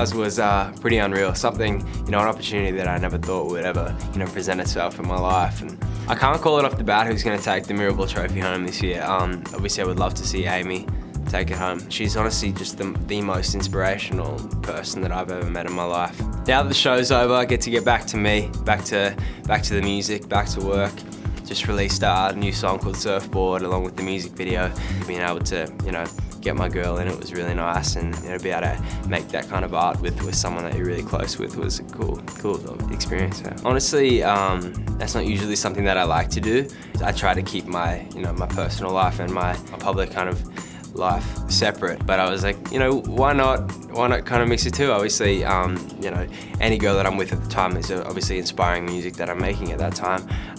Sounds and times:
Music: 0.0 - 50.5
Speech: 0.0 - 50.5.

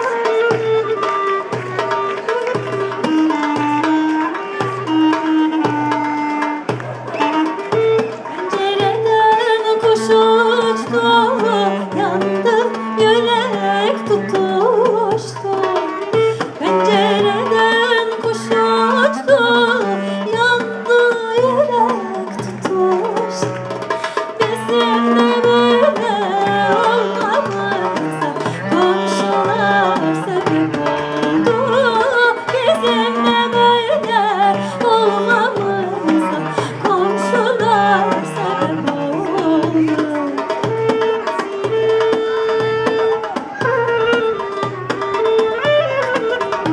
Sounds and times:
Music: 0.0 - 46.7.

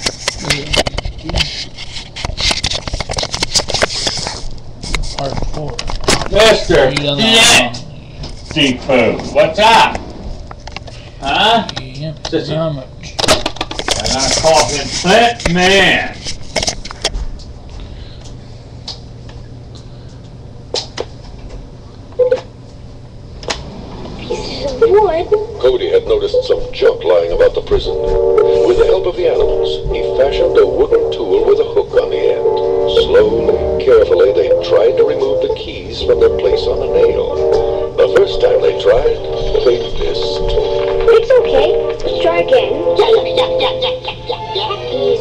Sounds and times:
Music: 27.8 - 45.2.

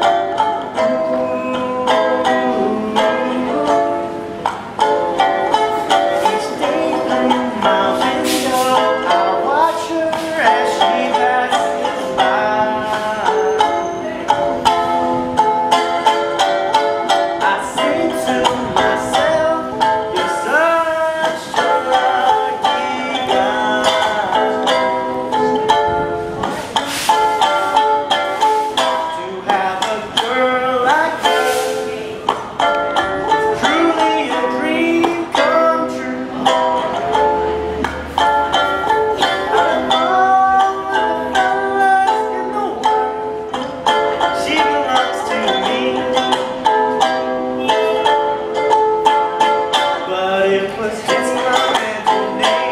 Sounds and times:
Ukulele: 0.0 - 52.7.

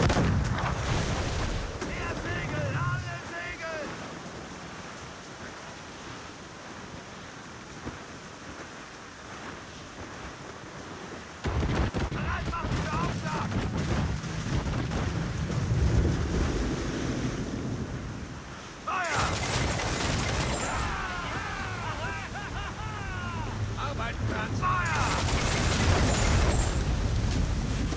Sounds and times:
Boat, Water vehicle: 0.0 - 27.9
Waves, surf: 0.0 - 27.9
Wind noise (microphone): 11.4 - 18.4, 25.7 - 27.9.

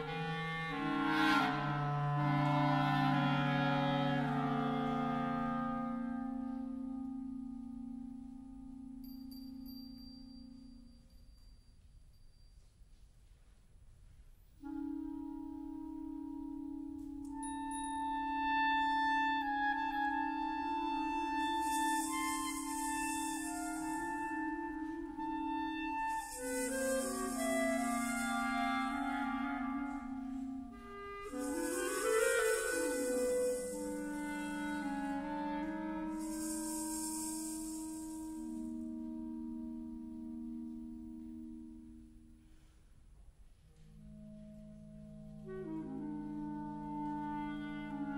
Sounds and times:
Clarinet: 0.0 - 13.1, 14.5 - 48.1.

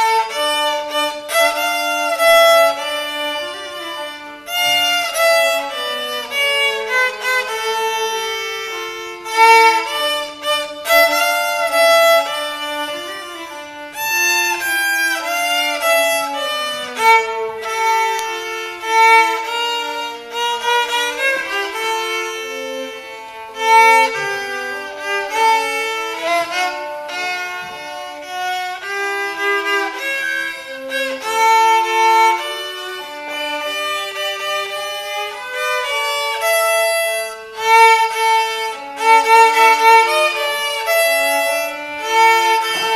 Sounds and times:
Violin, fiddle: 0.0 - 42.9.

